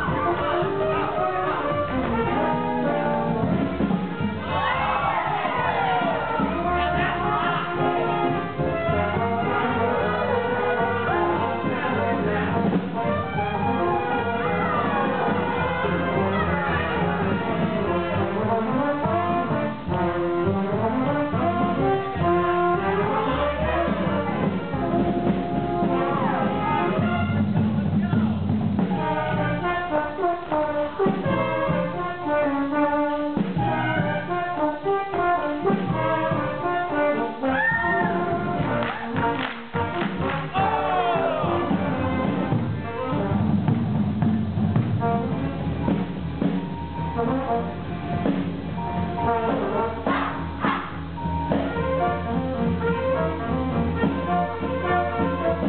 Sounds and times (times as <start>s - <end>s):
Inside, large room or hall: 0.0s - 55.6s
Music: 0.0s - 55.6s.